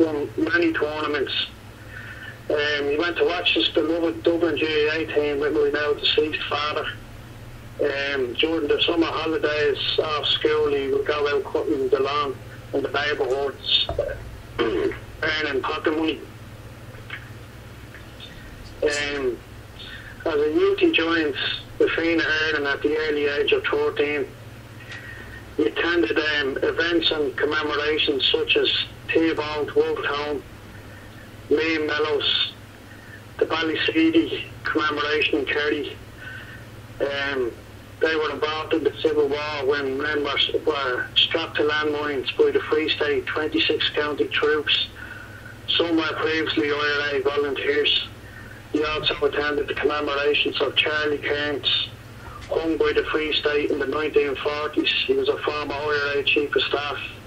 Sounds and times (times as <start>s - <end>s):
Speech: 0.0s - 1.6s, 2.5s - 7.0s, 7.8s - 16.3s, 18.2s - 24.4s, 25.6s - 30.5s, 31.5s - 32.6s, 33.4s - 36.0s, 37.0s - 45.0s, 45.7s - 57.2s.